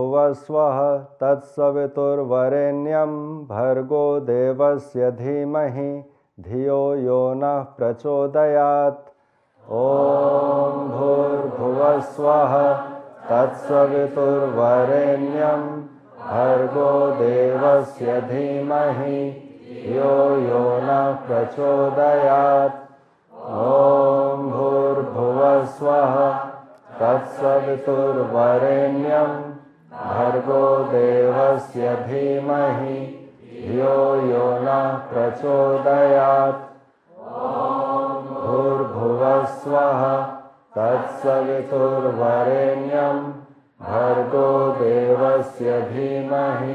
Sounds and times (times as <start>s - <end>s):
Mantra: 0.0s - 9.0s, 9.6s - 46.7s.